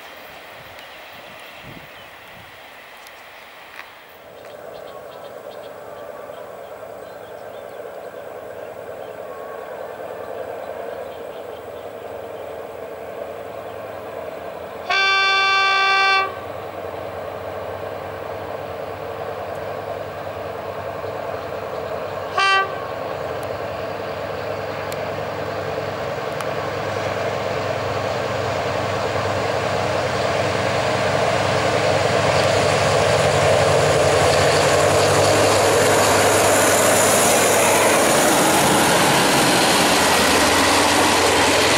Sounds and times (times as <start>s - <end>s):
Railroad car, train wagon: 0.0s - 41.7s
Train horn: 14.8s - 16.5s, 22.3s - 23.1s.